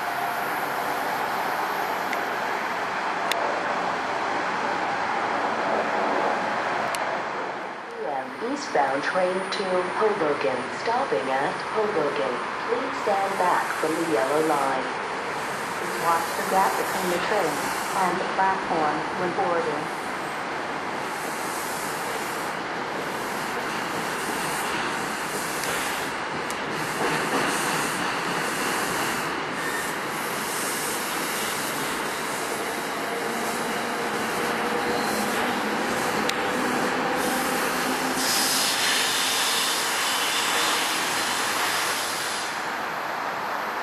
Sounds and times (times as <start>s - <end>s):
Railroad car, train wagon: 0.0s - 43.8s
Train: 0.0s - 43.8s.